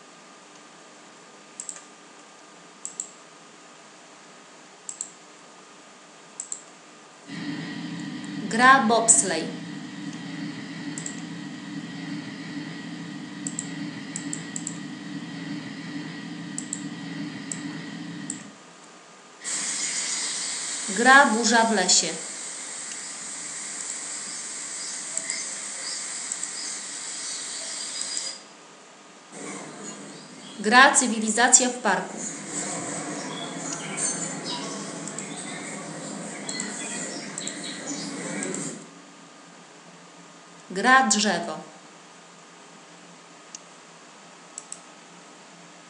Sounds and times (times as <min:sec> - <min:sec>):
Hiss: 0:07.3 - 0:18.5, 0:19.4 - 0:28.5, 0:29.4 - 0:31.2, 0:32.0 - 0:38.9.